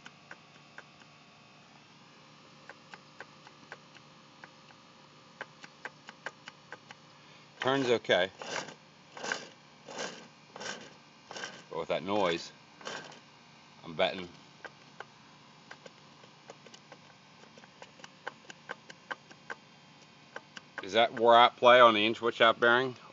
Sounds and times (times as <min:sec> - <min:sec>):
Speech: 0:07.6 - 0:08.4, 0:11.7 - 0:12.6, 0:13.8 - 0:14.4, 0:20.8 - 0:23.0.